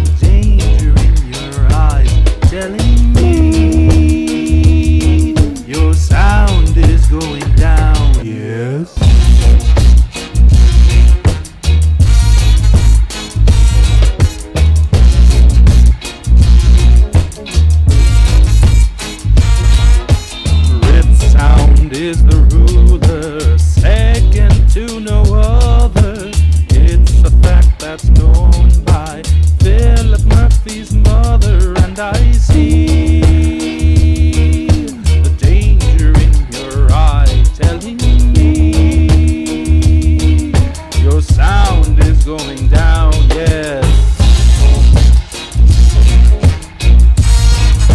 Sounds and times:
Music: 0.0s - 47.9s.

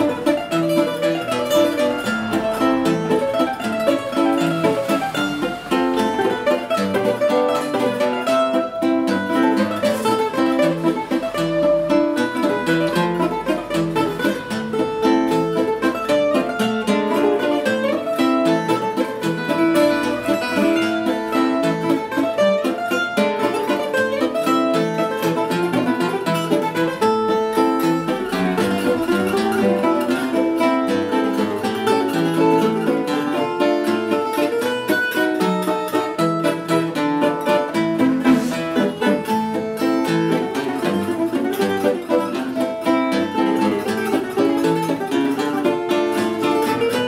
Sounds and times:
Mandolin: 0.0s - 47.0s
Ukulele: 0.0s - 47.0s.

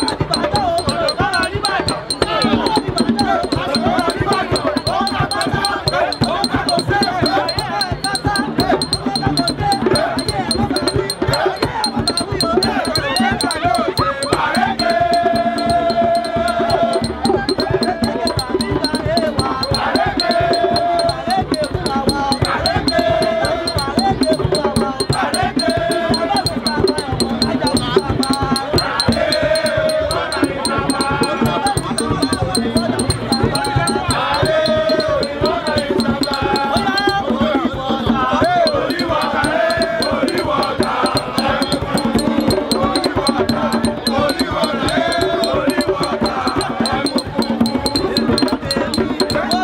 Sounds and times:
Male singing: 0.0s - 49.6s
Music: 0.0s - 49.6s.

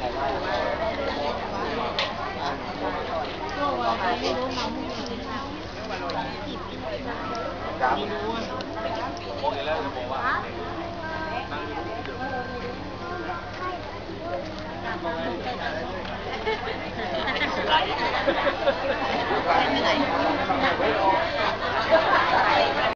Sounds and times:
Speech: 0.0s - 22.9s.

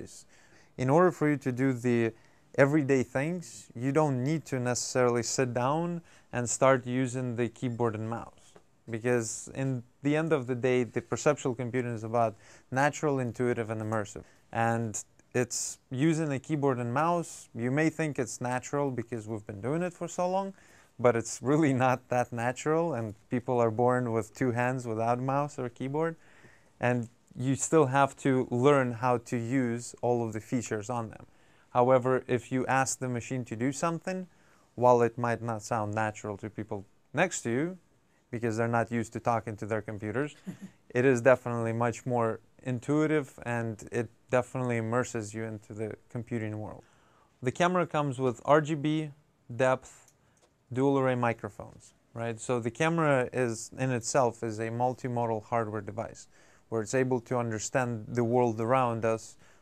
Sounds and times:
Speech: 0.0s - 26.2s, 26.8s - 46.8s, 47.4s - 50.1s, 50.7s - 59.4s.

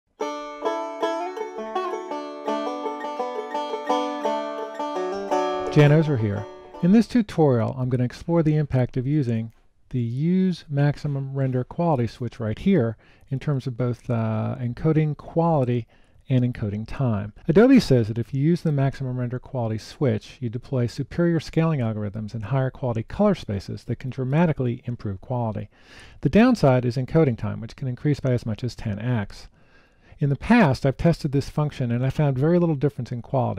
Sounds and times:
Banjo: 0.1s - 7.8s.

